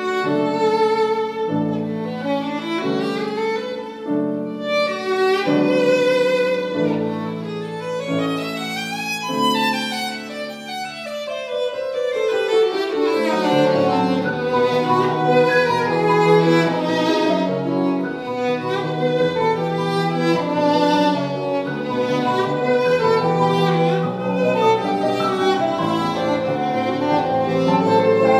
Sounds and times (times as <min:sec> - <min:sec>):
Violin, fiddle: 0:00.0 - 0:28.3.